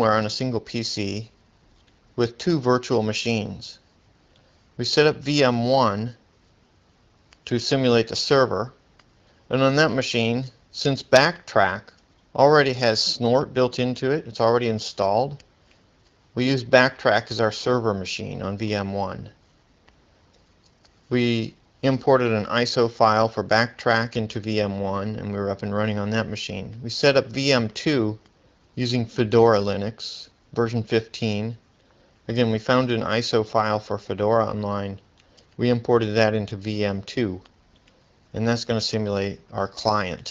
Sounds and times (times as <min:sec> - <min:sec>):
Speech: 0:00.0 - 0:01.4, 0:02.2 - 0:03.8, 0:04.8 - 0:06.2, 0:07.5 - 0:08.8, 0:09.5 - 0:15.5, 0:16.4 - 0:19.4, 0:21.1 - 0:28.2, 0:28.8 - 0:31.6, 0:32.3 - 0:35.0, 0:35.6 - 0:37.5, 0:38.3 - 0:40.3.